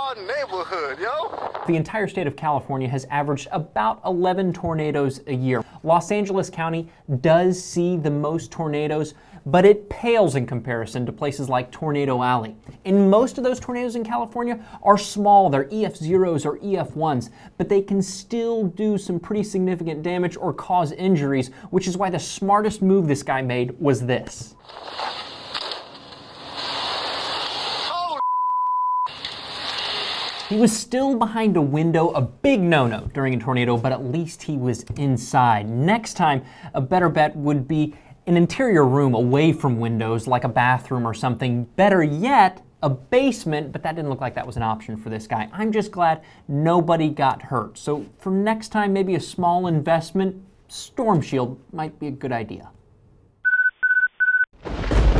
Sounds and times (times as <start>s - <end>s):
Speech: 0.0s - 24.6s, 27.9s - 28.2s, 30.5s - 52.8s.